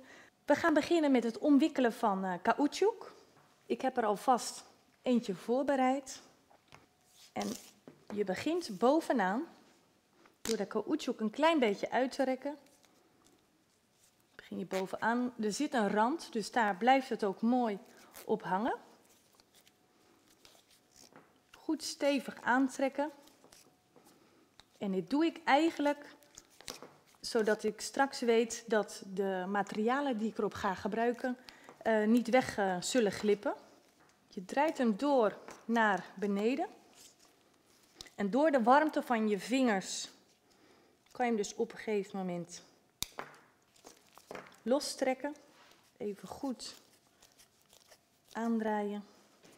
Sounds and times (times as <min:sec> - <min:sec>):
Speech: 0:00.5 - 0:06.2, 0:07.4 - 0:09.5, 0:10.5 - 0:12.6, 0:14.4 - 0:18.9, 0:21.6 - 0:23.2, 0:24.8 - 0:26.2, 0:27.2 - 0:33.6, 0:34.4 - 0:36.7, 0:38.2 - 0:40.2, 0:41.2 - 0:42.7, 0:44.7 - 0:45.4, 0:46.0 - 0:46.8.